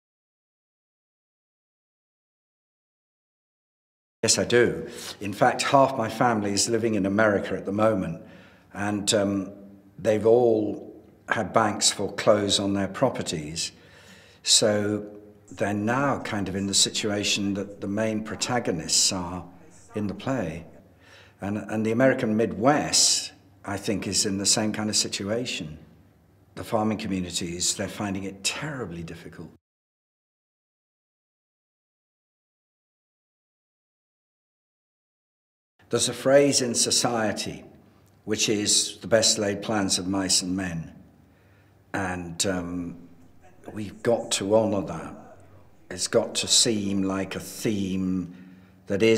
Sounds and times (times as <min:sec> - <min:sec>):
Speech: 0:04.2 - 0:13.8, 0:14.4 - 0:20.8, 0:21.4 - 0:25.9, 0:26.6 - 0:29.6, 0:35.9 - 0:41.0, 0:41.9 - 0:49.1.